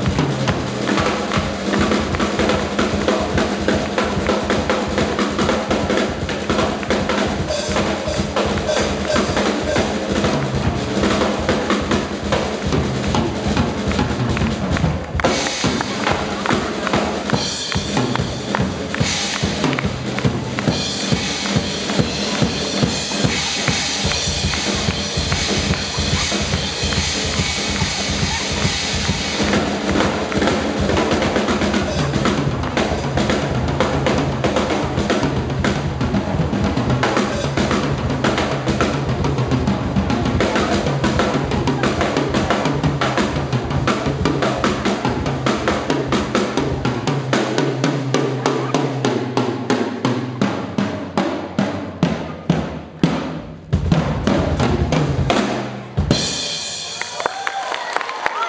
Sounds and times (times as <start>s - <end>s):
Bass drum: 0.0s - 56.4s
Snare drum: 0.0s - 57.4s
Drum kit: 0.0s - 58.4s.